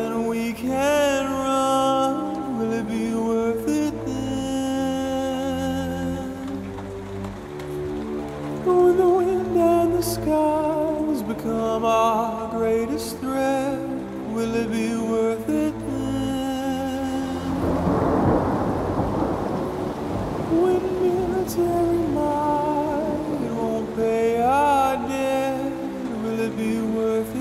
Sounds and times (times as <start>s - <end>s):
Music: 0.0s - 27.4s
Thunderstorm: 17.6s - 24.6s.